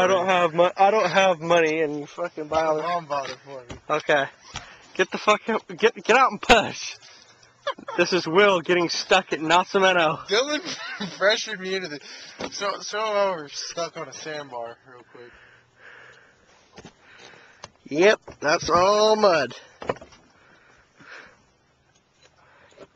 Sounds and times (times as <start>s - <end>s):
Laughter: 7.6s - 8.3s, 10.4s - 11.4s.